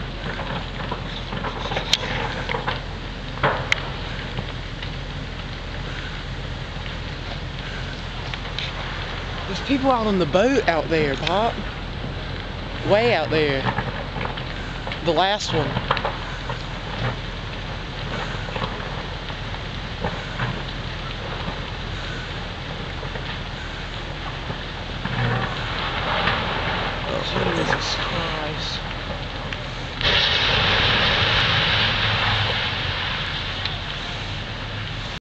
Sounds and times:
Speech: 9.5s - 11.6s, 12.8s - 13.8s, 15.0s - 15.8s, 27.1s - 28.8s.

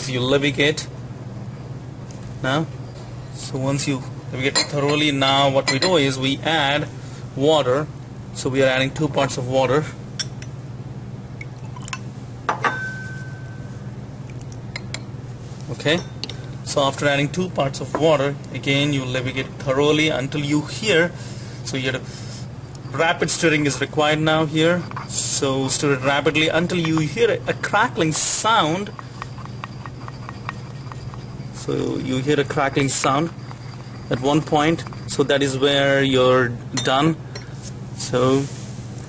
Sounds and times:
Speech: 0.0s - 0.9s, 2.4s - 2.7s, 3.4s - 10.0s, 15.7s - 16.1s, 16.7s - 22.0s, 23.0s - 28.9s, 31.6s - 33.4s, 34.1s - 37.2s, 38.0s - 38.5s.

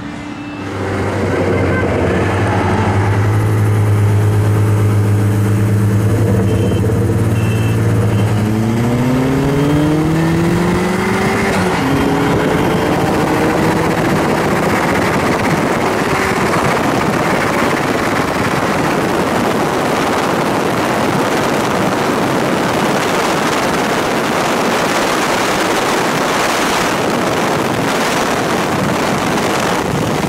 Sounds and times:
Car: 0.0s - 30.2s
Outside, urban or manmade: 0.0s - 30.2s.

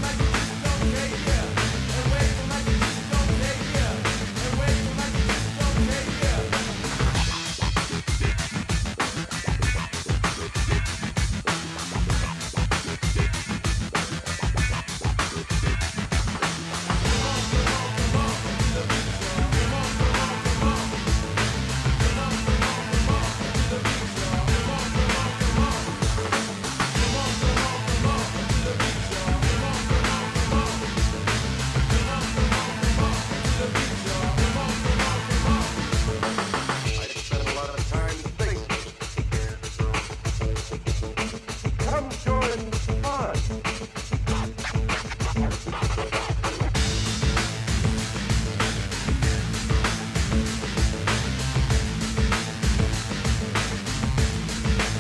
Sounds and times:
Soundtrack music: 0.0s - 55.0s.

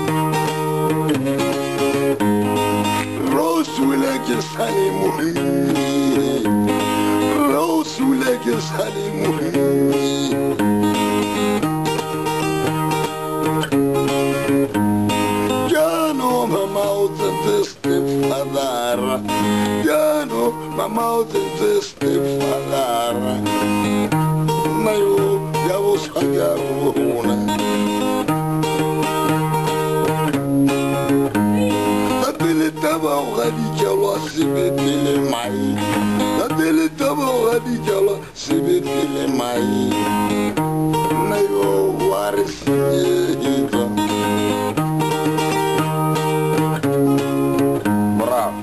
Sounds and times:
Acoustic guitar: 0.0s - 48.6s.

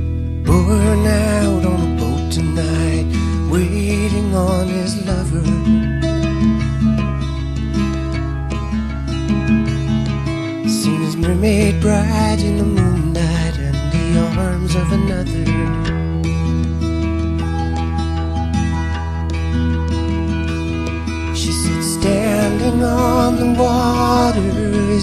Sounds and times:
Music: 0.0s - 25.0s.

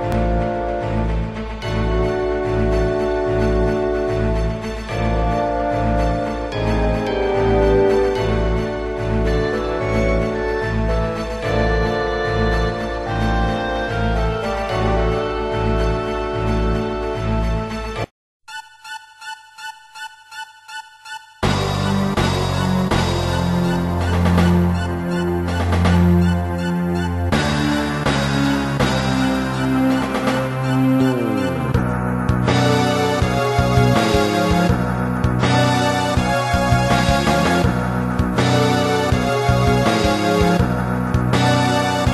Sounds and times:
Music: 0.0s - 42.1s.

